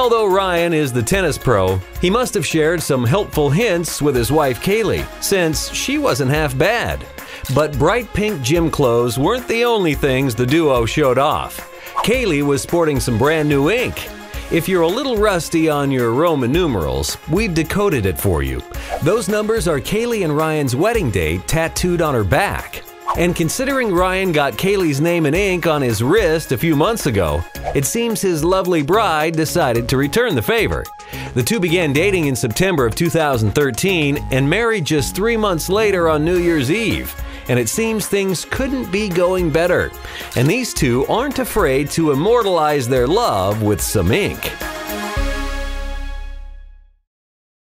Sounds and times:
Speech: 0.0 - 44.6
Music: 0.0 - 47.1.

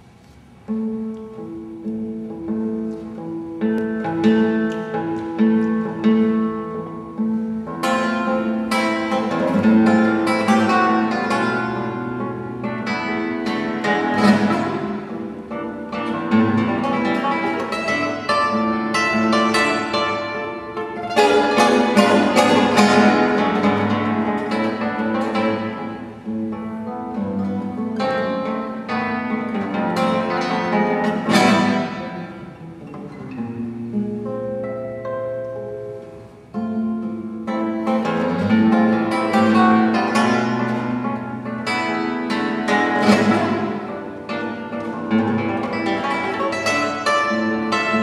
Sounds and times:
Acoustic guitar: 0.0 - 48.0
Strum: 0.0 - 48.0.

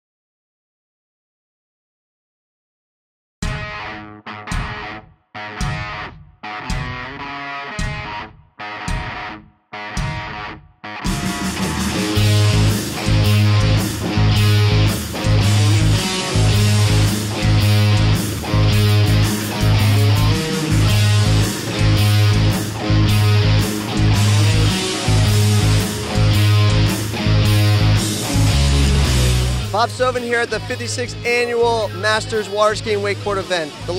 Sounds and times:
Music: 3.4 - 33.9
Speech: 29.7 - 33.9.

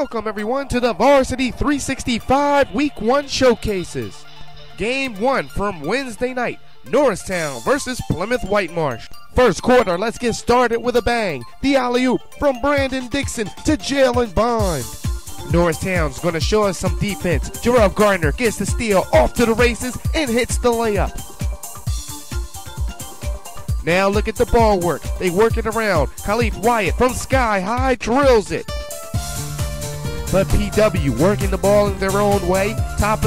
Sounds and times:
Speech: 0.0 - 4.2, 4.8 - 14.9, 15.5 - 21.2, 23.8 - 28.7, 30.3 - 33.2
Music: 0.0 - 33.2.

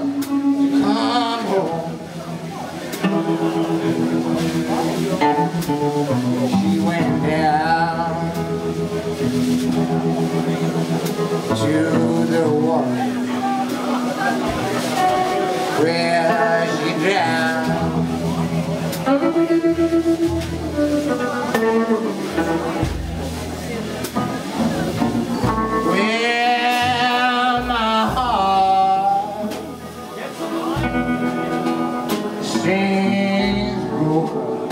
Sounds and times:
Music: 0.0 - 34.7
Speech: 0.0 - 34.7.

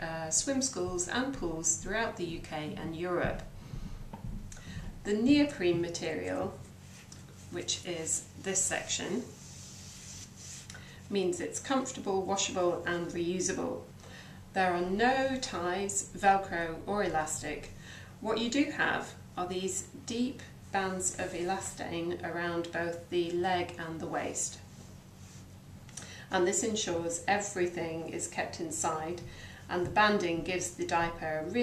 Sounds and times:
Speech: 0.0 - 3.5, 5.1 - 6.6, 7.5 - 9.3, 11.1 - 13.9, 14.6 - 24.6, 26.3 - 31.6.

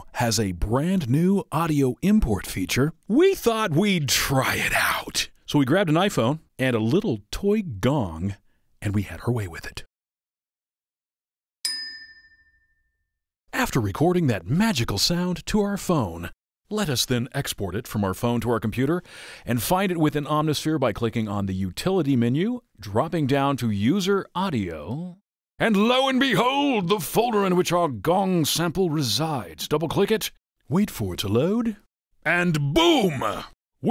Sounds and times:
Speech: 0.0 - 9.9, 13.5 - 33.9.

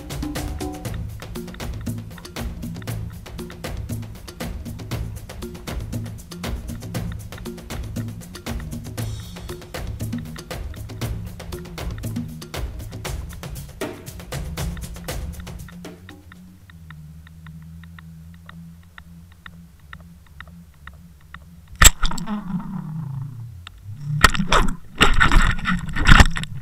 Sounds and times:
Music: 0.0 - 21.7.

